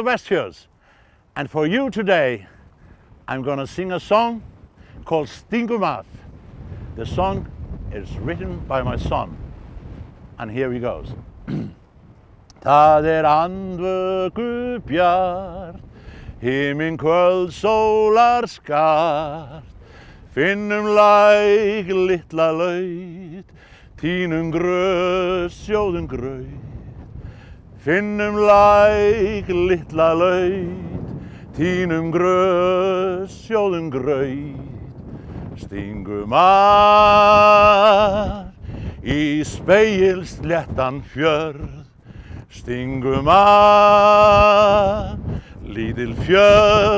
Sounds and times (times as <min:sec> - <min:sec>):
Male singing: 0:12.6 - 0:15.8, 0:16.4 - 0:19.7, 0:20.4 - 0:26.7, 0:27.8 - 0:31.0, 0:31.6 - 0:34.8, 0:35.6 - 0:41.9, 0:42.5 - 0:46.9.